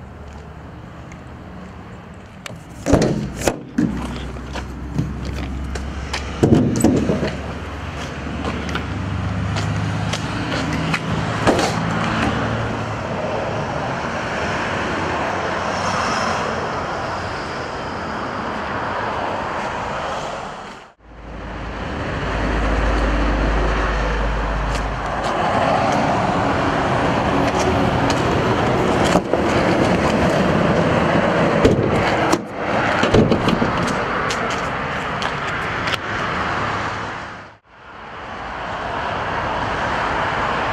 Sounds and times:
Traffic noise, roadway noise: 0.0 - 40.7.

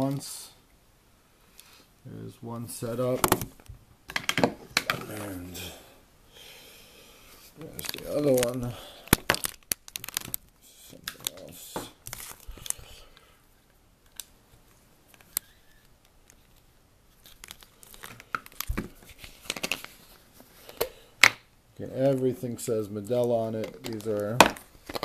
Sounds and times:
Speech: 0.0 - 0.6, 2.1 - 3.3, 5.0 - 5.8, 7.6 - 8.8, 21.8 - 24.5.

